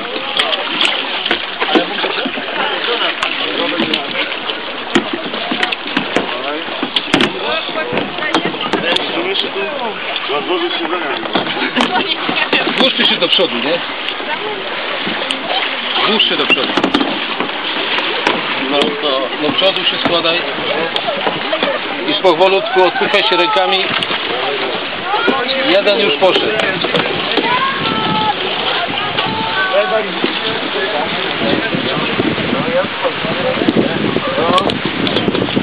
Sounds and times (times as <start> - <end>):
Rowboat, canoe, kayak: 0.0 - 35.6.